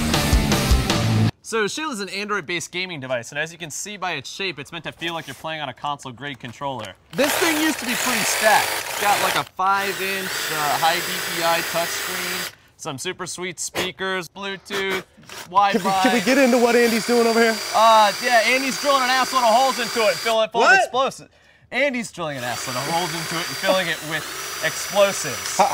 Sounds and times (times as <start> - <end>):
Speech: 1.4 - 25.7.